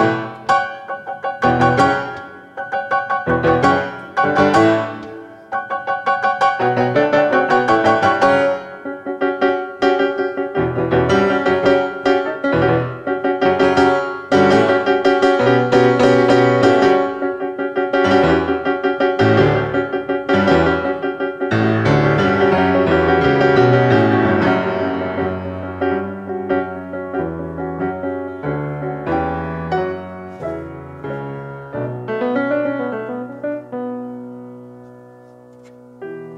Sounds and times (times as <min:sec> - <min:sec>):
Electric piano: 0:00.0 - 0:36.3.